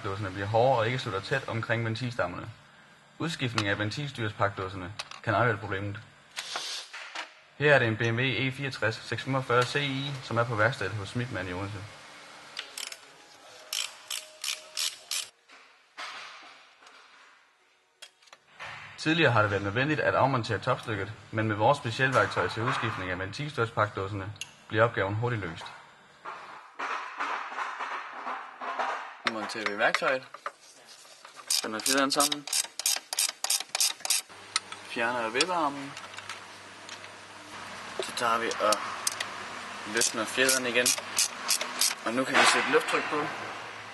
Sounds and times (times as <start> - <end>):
Speech: 0.0 - 2.6, 3.2 - 6.1, 7.6 - 11.9, 19.0 - 25.8, 29.3 - 30.3, 31.6 - 32.5, 34.9 - 36.0, 38.0 - 38.8, 39.9 - 41.0, 42.0 - 43.4.